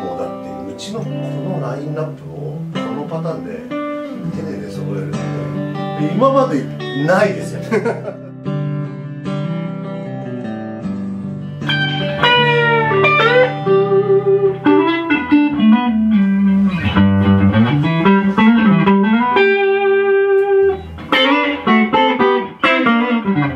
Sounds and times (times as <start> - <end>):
Speech: 0.0 - 8.0
Acoustic guitar: 0.0 - 23.5
Electric guitar: 0.0 - 23.5.